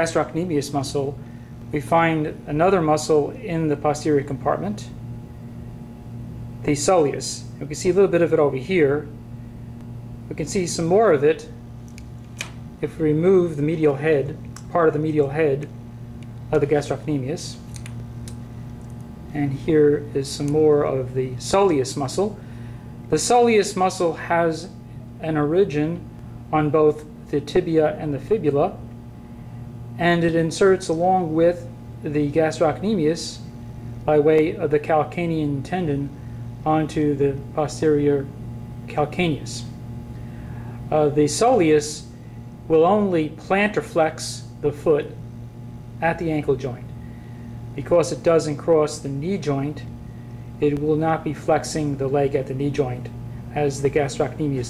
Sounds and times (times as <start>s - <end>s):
Speech: 0.0s - 5.0s, 6.6s - 9.2s, 10.3s - 11.6s, 12.8s - 15.7s, 16.5s - 17.6s, 19.3s - 22.4s, 23.1s - 28.8s, 30.0s - 33.5s, 34.1s - 39.8s, 40.9s - 42.1s, 42.7s - 45.2s, 46.0s - 46.9s, 47.8s - 49.9s, 50.6s - 54.7s.